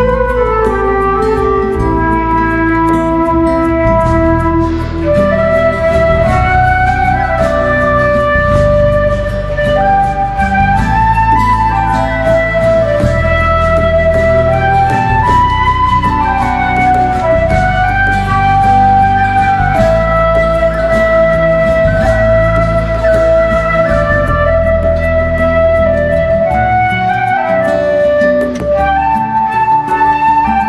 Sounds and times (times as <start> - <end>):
Flute: 0.0 - 30.6.